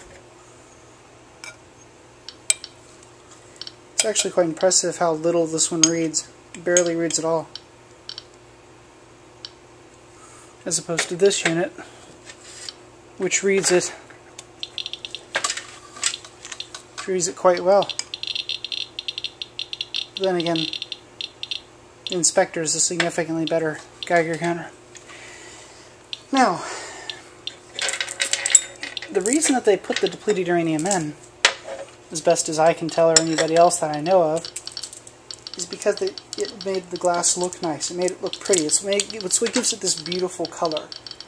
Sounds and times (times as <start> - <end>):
Rattle: 27.5 - 30.0, 34.4 - 37.6.